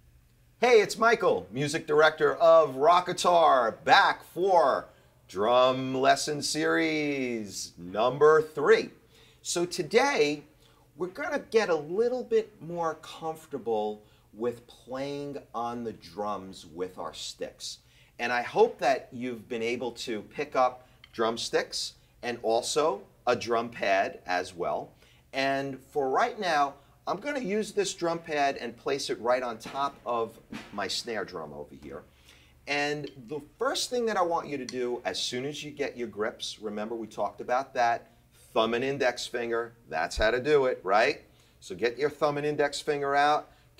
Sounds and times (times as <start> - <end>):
Speech: 0.6 - 32.1, 32.7 - 43.5.